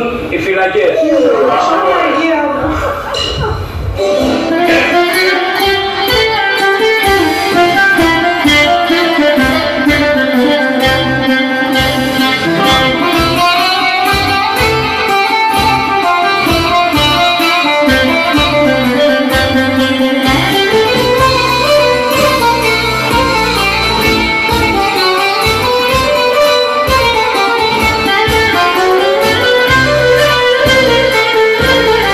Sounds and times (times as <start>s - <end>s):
Plucked string instrument: 2.6s - 32.1s
Folk music: 3.4s - 32.1s.